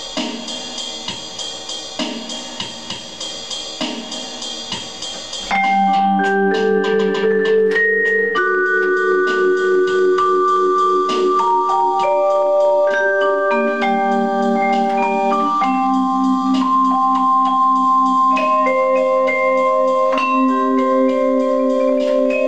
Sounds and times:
Marimba, xylophone: 0:05.5 - 0:22.4
Vibraphone: 0:05.5 - 0:22.4.

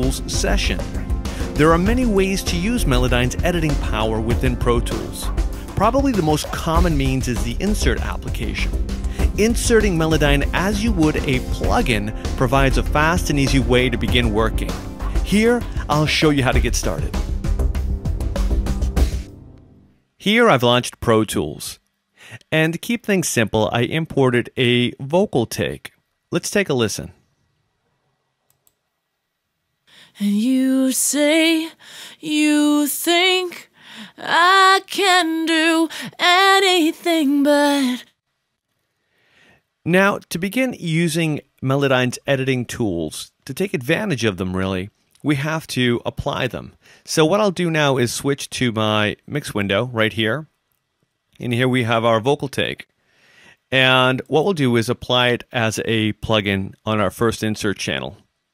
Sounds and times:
Speech: 0:00.0 - 0:00.9, 0:01.6 - 0:17.2, 0:20.2 - 0:27.2, 0:39.9 - 0:50.5, 0:51.4 - 0:52.9, 0:53.7 - 0:58.2
Music: 0:00.0 - 0:20.1.

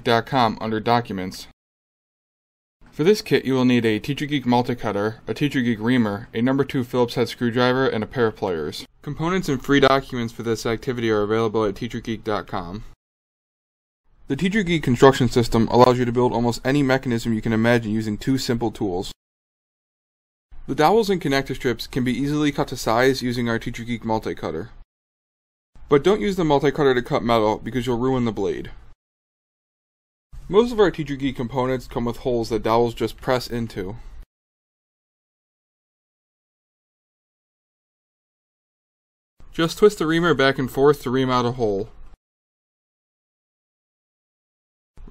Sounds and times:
Speech: 0:00.0 - 0:01.6, 0:02.9 - 0:13.0, 0:14.3 - 0:19.2, 0:20.6 - 0:24.8, 0:25.9 - 0:28.8, 0:30.5 - 0:34.0, 0:39.5 - 0:42.0.

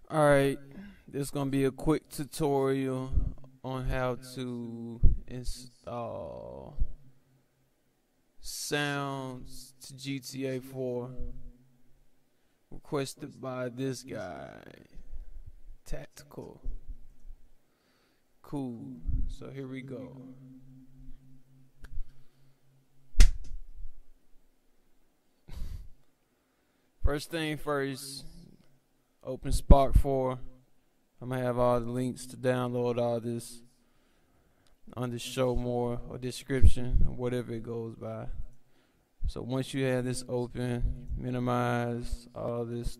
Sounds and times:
Speech: 0:00.1 - 0:06.9, 0:08.4 - 0:11.3, 0:12.7 - 0:15.0, 0:15.9 - 0:16.7, 0:18.4 - 0:20.5, 0:27.0 - 0:28.5, 0:29.2 - 0:30.5, 0:31.2 - 0:33.6, 0:34.9 - 0:38.4, 0:39.3 - 0:42.9.

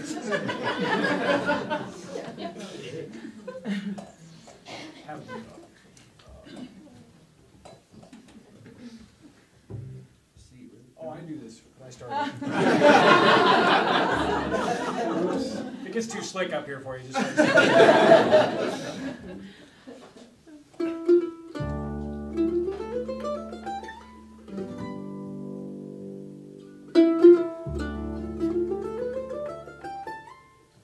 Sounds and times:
Ukulele: 0:09.7 - 0:10.1, 0:20.3 - 0:30.8
Guitar: 0:20.7 - 0:30.8.

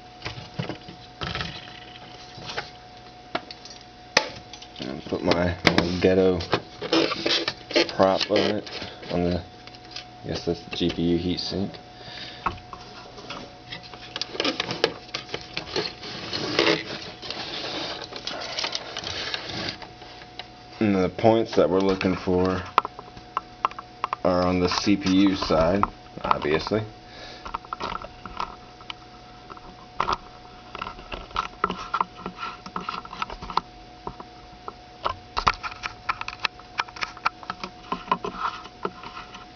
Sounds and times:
Speech: 0:04.8 - 0:06.6, 0:07.8 - 0:09.5, 0:10.3 - 0:11.8, 0:20.8 - 0:22.8, 0:24.2 - 0:26.9.

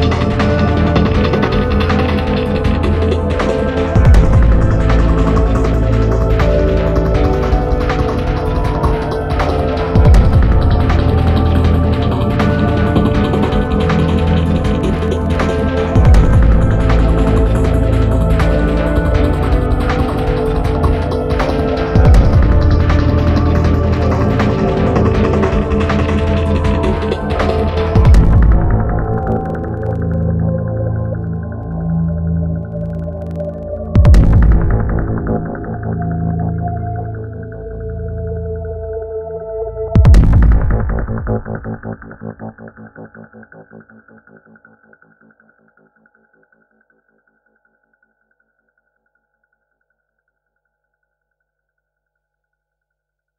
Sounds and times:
Music: 0:00.0 - 0:53.3.

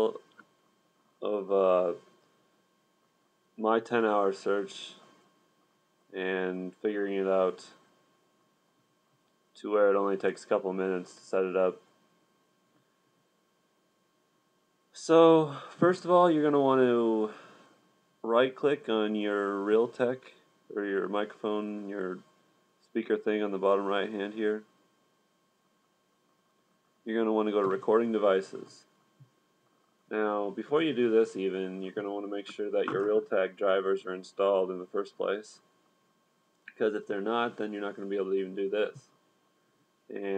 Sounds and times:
Speech: 0:00.0 - 0:00.4, 0:01.2 - 0:02.1, 0:03.6 - 0:05.1, 0:06.1 - 0:07.9, 0:09.6 - 0:11.9, 0:14.9 - 0:17.4, 0:18.2 - 0:24.7, 0:27.0 - 0:28.9, 0:30.1 - 0:35.7, 0:36.7 - 0:39.2, 0:40.1 - 0:40.3.

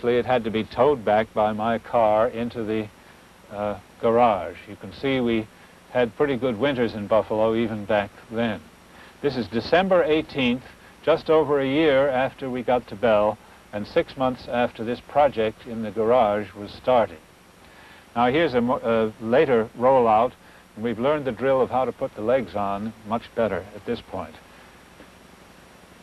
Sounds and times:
Speech: 0:00.0 - 0:02.9, 0:03.5 - 0:17.2, 0:18.2 - 0:24.4.

